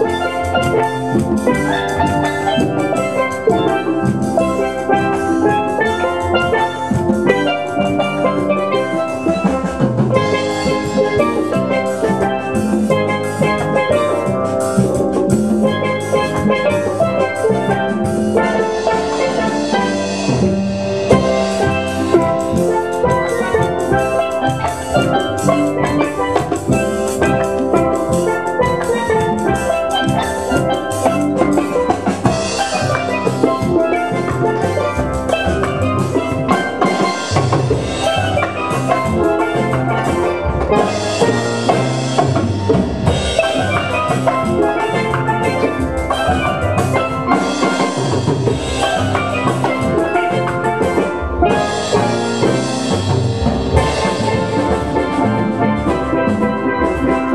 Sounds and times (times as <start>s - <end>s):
Drum: 0.0s - 57.3s
Drum kit: 0.0s - 57.3s
Jazz: 0.0s - 57.3s
Steelpan: 0.0s - 57.3s.